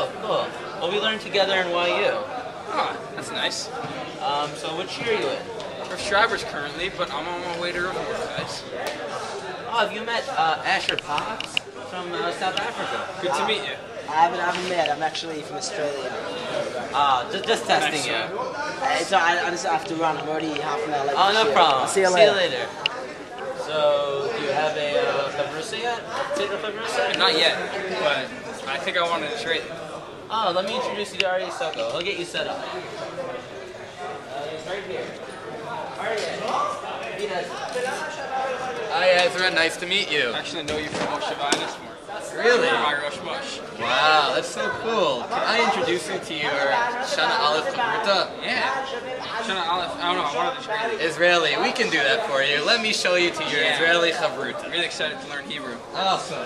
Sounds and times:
Male speech, man speaking: 0.0s - 56.4s.

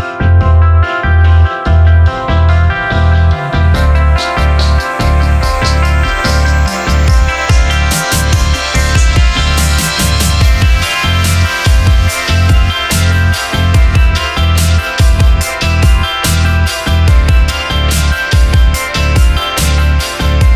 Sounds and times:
Music: 0.0s - 20.5s.

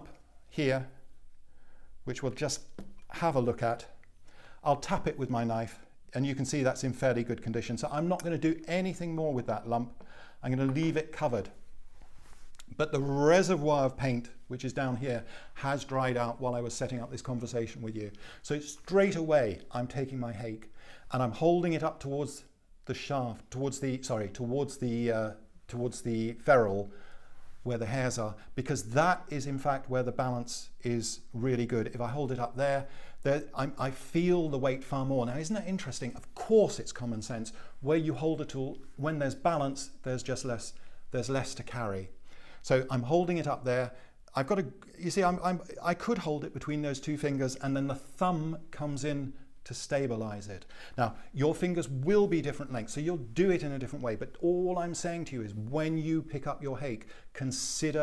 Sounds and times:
Speech: 0.0s - 1.0s, 2.0s - 4.0s, 4.6s - 11.6s, 12.6s - 26.9s, 27.6s - 58.0s.

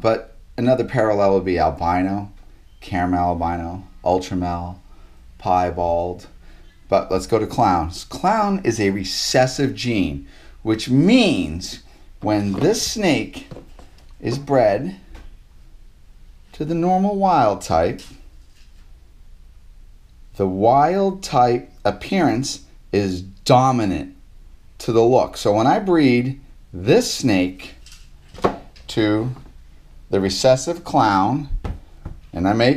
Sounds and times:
Speech: 0.0s - 4.8s, 5.4s - 13.6s, 14.2s - 15.0s, 16.6s - 18.2s, 20.4s - 24.2s, 24.8s - 27.8s, 28.9s - 29.5s, 30.1s - 31.6s, 32.3s - 32.7s.

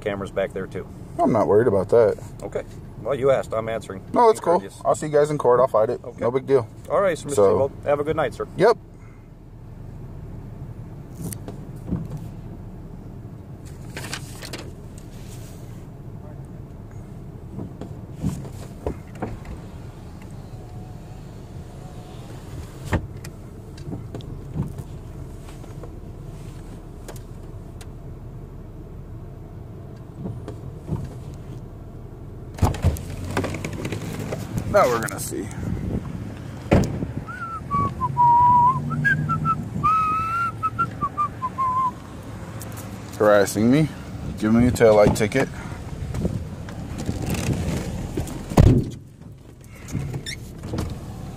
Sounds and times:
Speech: 0.0s - 8.8s, 34.7s - 35.6s, 43.2s - 45.6s.

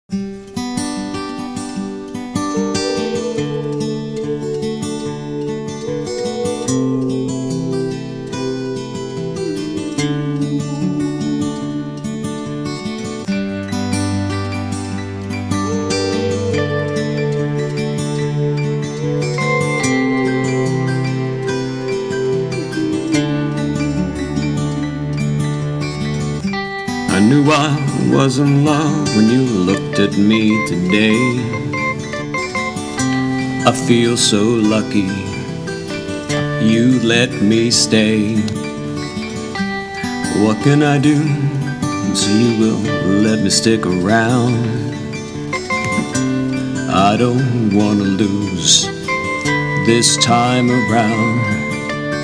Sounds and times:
Acoustic guitar: 0.0s - 52.2s.

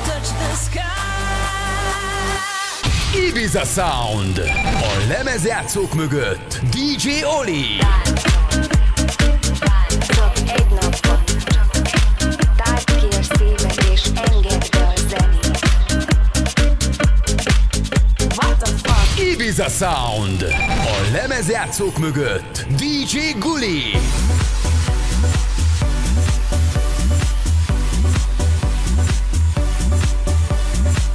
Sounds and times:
Music: 0.0s - 31.1s
Speech: 3.1s - 8.2s, 9.9s - 11.7s, 12.6s - 15.8s, 18.4s - 24.0s
Beep, bleep: 4.4s - 5.1s, 20.5s - 21.1s.

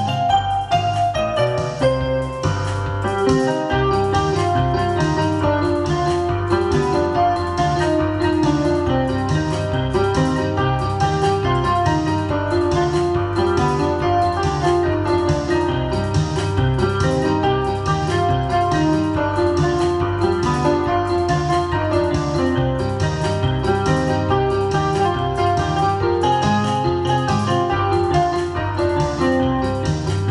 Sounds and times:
Electric piano: 0.0s - 30.3s.

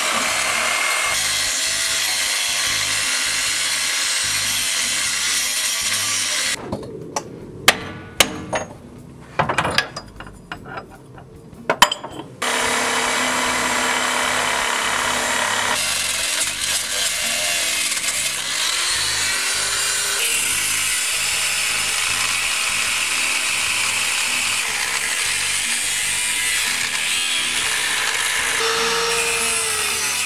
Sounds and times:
Power tool: 0.0s - 6.6s, 12.4s - 30.2s
Hammer: 7.7s - 8.8s.

